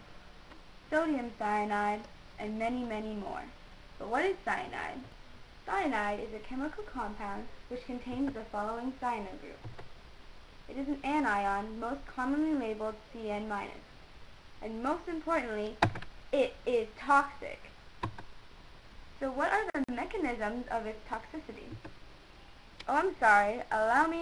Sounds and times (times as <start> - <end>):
Speech: 0.9 - 5.1, 5.7 - 9.6, 10.7 - 13.9, 14.6 - 15.8, 16.4 - 17.7, 19.2 - 21.8, 22.8 - 24.2.